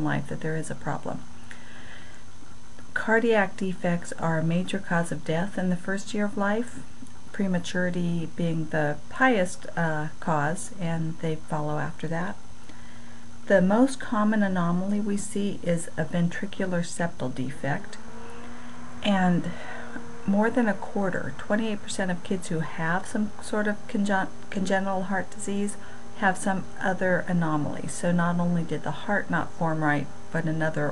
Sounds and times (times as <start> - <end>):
Speech: 0.0 - 1.3, 2.9 - 12.4, 13.5 - 18.0, 19.0 - 30.9.